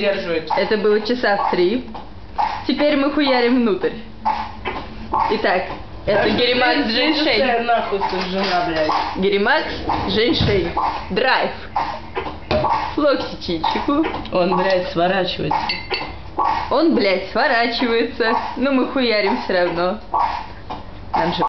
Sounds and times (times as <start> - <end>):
Speech: 21.2 - 21.4.